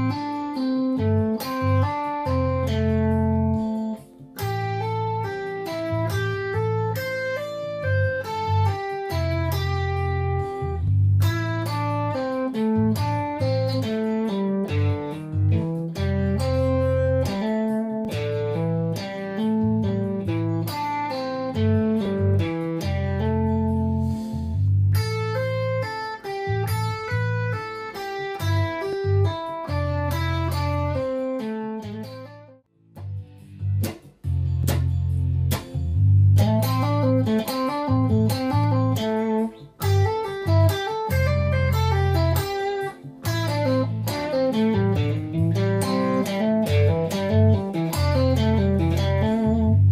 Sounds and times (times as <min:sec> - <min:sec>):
Electric guitar: 0:00.0 - 0:49.9.